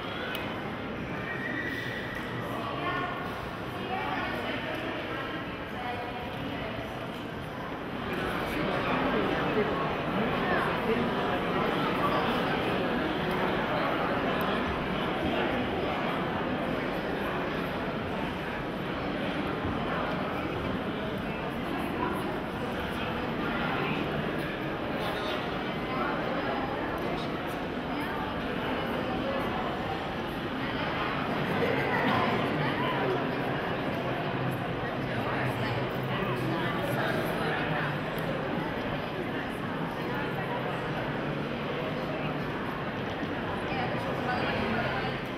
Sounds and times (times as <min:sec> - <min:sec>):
Speech: 0:00.0 - 0:45.3.